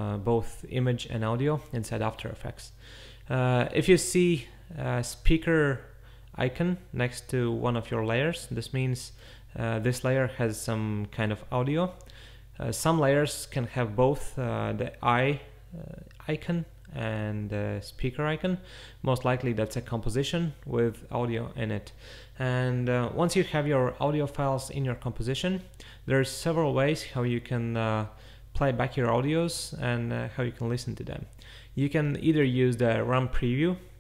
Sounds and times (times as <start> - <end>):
Speech: 0.0 - 12.0, 12.6 - 34.0.